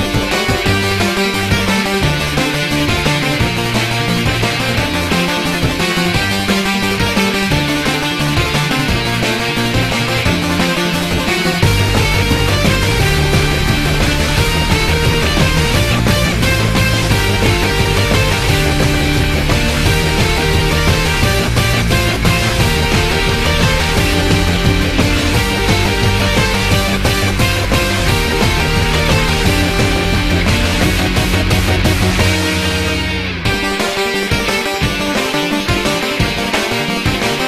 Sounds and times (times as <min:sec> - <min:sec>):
Music: 0:00.0 - 0:37.4.